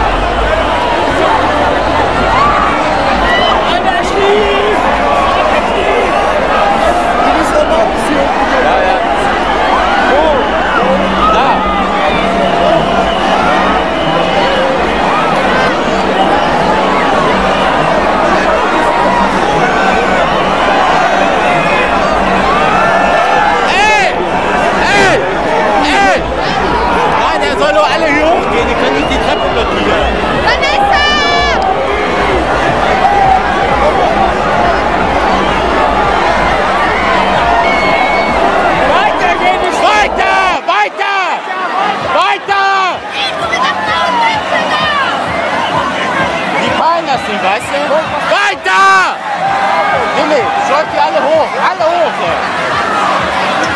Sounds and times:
Crowd: 0.0 - 53.7
Speech: 0.7 - 36.6, 49.8 - 53.7.

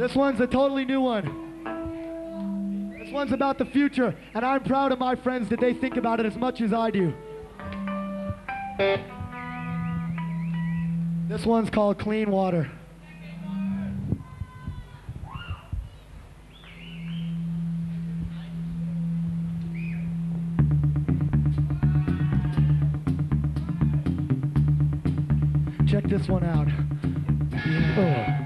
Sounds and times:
Music: 0.0 - 11.8, 12.9 - 14.5, 17.0 - 28.4
Speech: 11.3 - 15.1, 25.9 - 26.8.

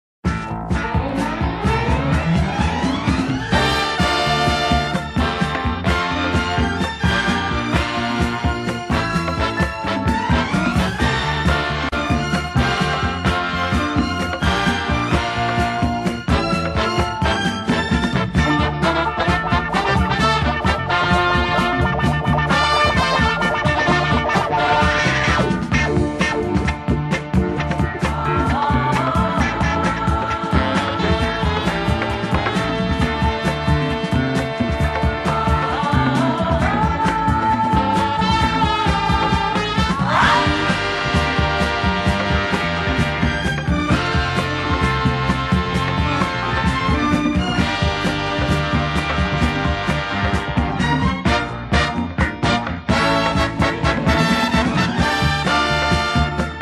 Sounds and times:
Disco: 0.3 - 56.6.

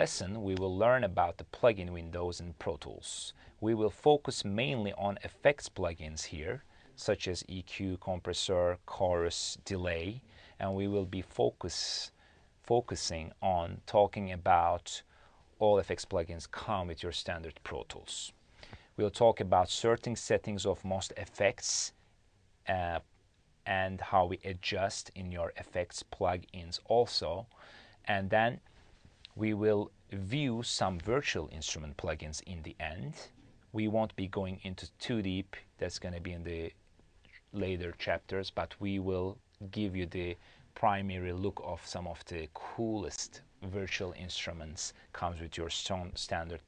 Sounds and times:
Speech: 0.0 - 18.4, 19.0 - 22.0, 22.6 - 28.7, 29.3 - 46.6.

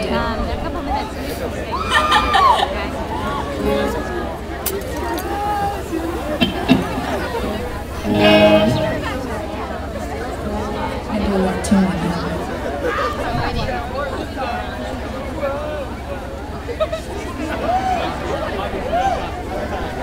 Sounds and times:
Speech: 0.0 - 20.0
Music: 6.4 - 9.5, 10.4 - 12.6.

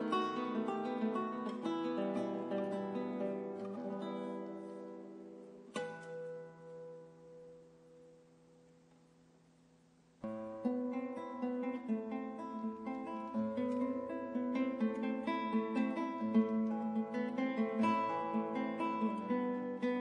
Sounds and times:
Acoustic guitar: 0.0 - 20.0.

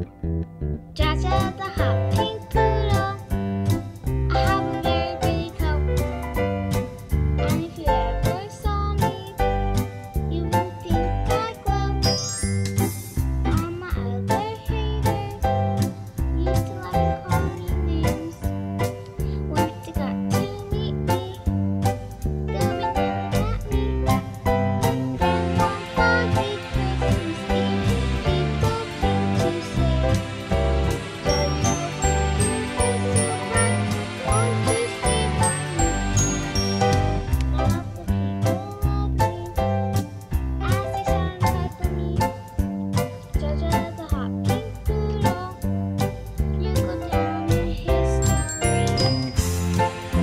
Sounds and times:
Music: 0.0 - 50.2.

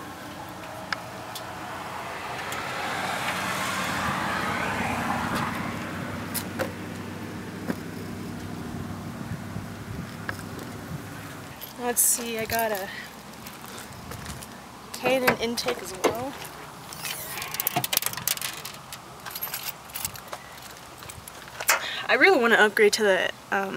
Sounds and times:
Vehicle: 0.0 - 23.7
Speech: 11.8 - 13.1, 15.0 - 16.4, 22.0 - 23.7.

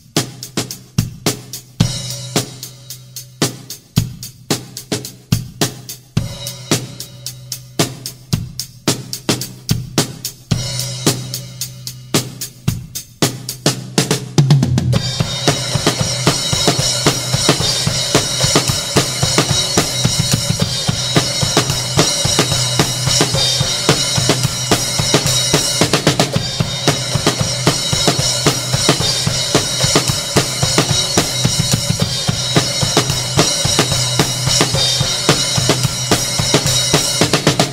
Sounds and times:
Bass drum: 0.0 - 37.7
Drum kit: 0.0 - 37.7
Snare drum: 12.2 - 37.7
Heavy metal: 14.9 - 37.7.

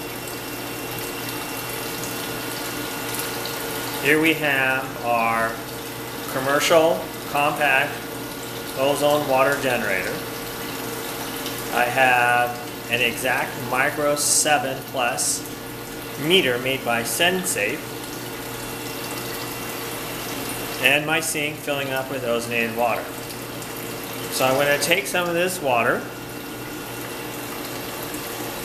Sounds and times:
Speech: 4.0 - 5.6, 6.3 - 8.0, 8.8 - 10.2, 11.7 - 15.5, 16.2 - 17.8, 20.8 - 23.1, 24.3 - 26.1.

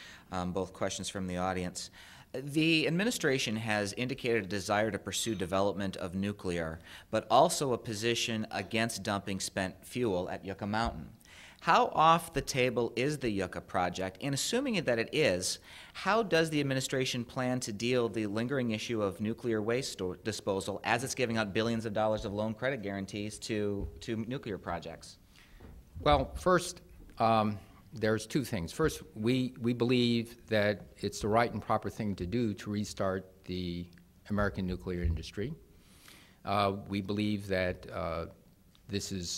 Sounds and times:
Narration, monologue: 0.0 - 39.3
Male speech, man speaking: 0.3 - 25.2, 26.0 - 35.6, 36.5 - 39.3
Conversation: 1.1 - 39.2.

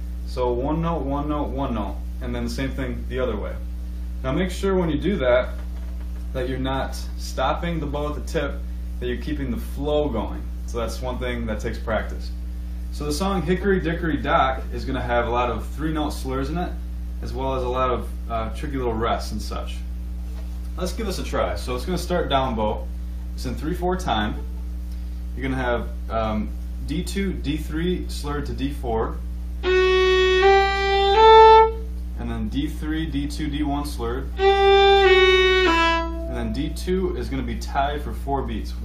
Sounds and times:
Speech: 0.3 - 5.6, 6.3 - 19.9, 20.8 - 24.5, 25.4 - 29.2, 32.2 - 34.4, 36.3 - 38.8.

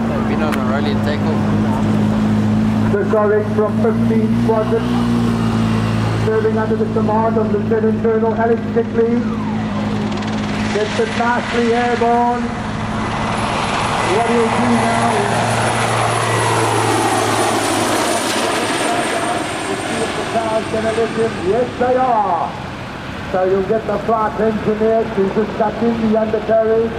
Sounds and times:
Speech: 0.0 - 1.4, 2.9 - 5.0, 6.2 - 9.3, 10.7 - 12.5, 14.1 - 15.5, 18.6 - 22.6, 23.3 - 26.9
Helicopter: 0.0 - 26.9.

